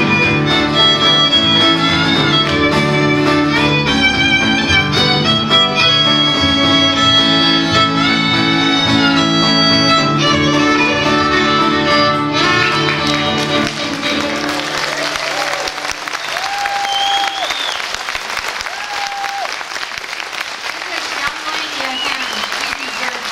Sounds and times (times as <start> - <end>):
Bowed string instrument: 0.0 - 16.2.